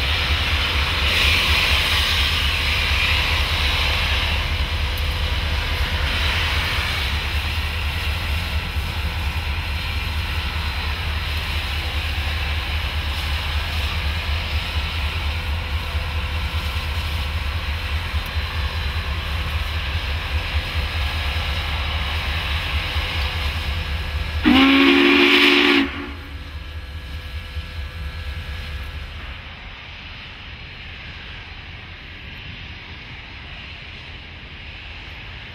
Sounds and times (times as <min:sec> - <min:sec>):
Hiss: 0:00.0 - 0:35.5
Steam whistle: 0:24.4 - 0:26.4
Train whistle: 0:24.4 - 0:26.4.